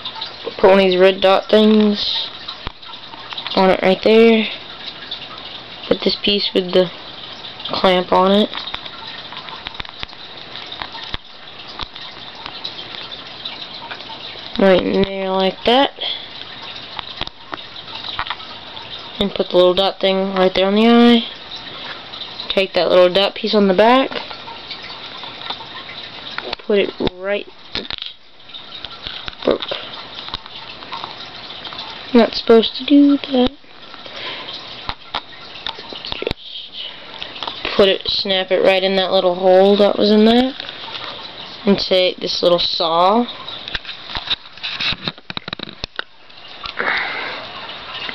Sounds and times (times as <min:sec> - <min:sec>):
Speech: 0:00.5 - 0:02.3, 0:03.6 - 0:04.6, 0:05.9 - 0:06.9, 0:07.7 - 0:08.6, 0:14.6 - 0:16.2, 0:19.2 - 0:21.3, 0:22.5 - 0:24.2, 0:26.5 - 0:27.5, 0:32.1 - 0:33.6, 0:37.7 - 0:40.6, 0:41.7 - 0:43.3.